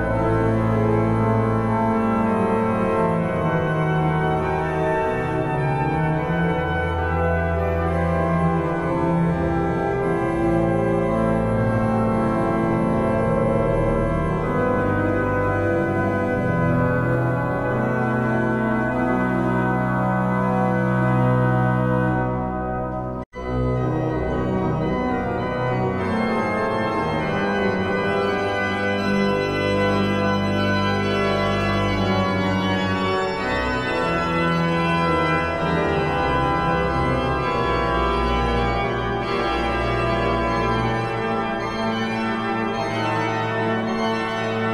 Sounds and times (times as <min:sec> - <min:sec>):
Piano: 0:00.0 - 0:44.7.